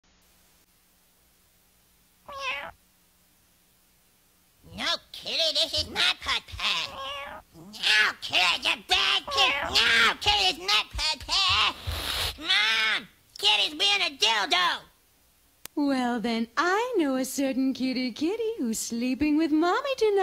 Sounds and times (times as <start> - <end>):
Cat: 2.3 - 2.8, 5.8 - 8.2, 9.0 - 10.1
Speech: 4.7 - 7.0, 7.6 - 11.8, 12.4 - 14.9, 15.8 - 20.2.